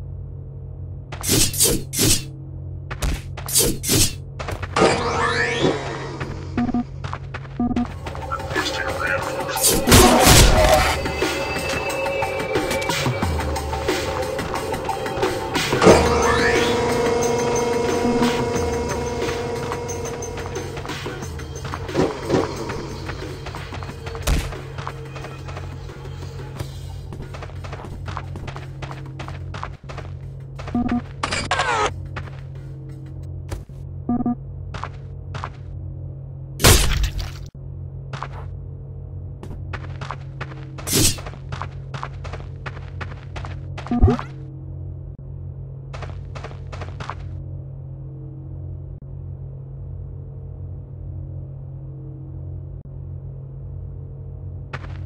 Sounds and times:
Music: 7.8s - 30.6s.

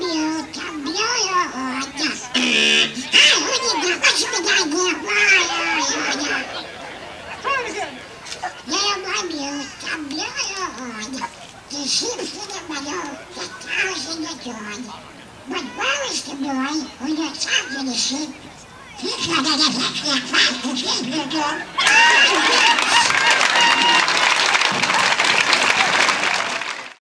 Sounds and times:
Speech: 0.0s - 23.9s.

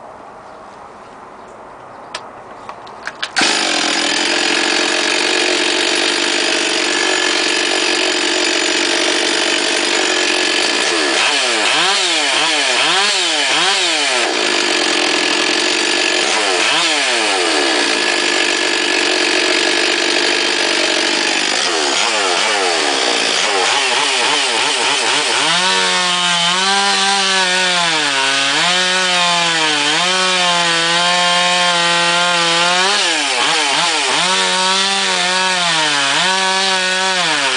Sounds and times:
Chainsaw: 3.2s - 37.5s
Power tool: 3.3s - 37.5s.

